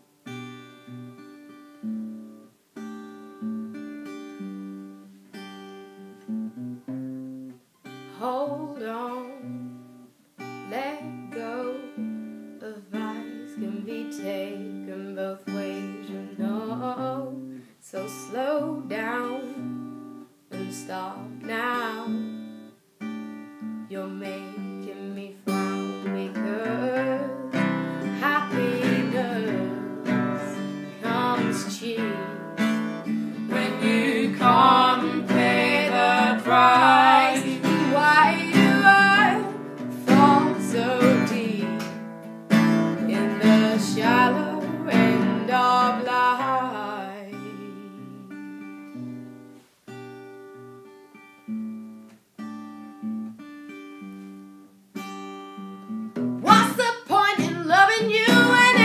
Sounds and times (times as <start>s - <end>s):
Inside, small room: 0.0s - 58.8s
Music: 0.0s - 58.8s.